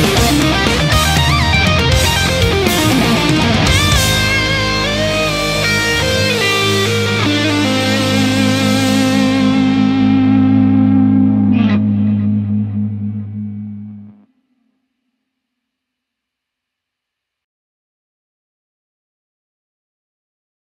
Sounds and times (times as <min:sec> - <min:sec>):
Guitar: 0:00.0 - 0:14.6
Effects unit: 0:00.0 - 0:15.1
Distortion: 0:00.0 - 0:17.4.